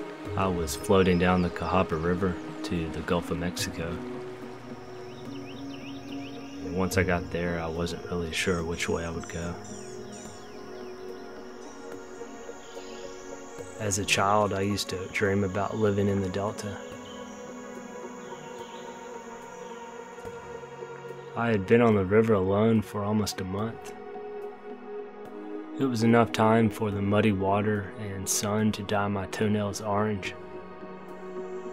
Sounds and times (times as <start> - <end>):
Music: 0.0 - 31.7
Speech: 0.4 - 4.0, 6.6 - 9.6, 13.8 - 16.8, 21.4 - 24.0, 25.8 - 30.4.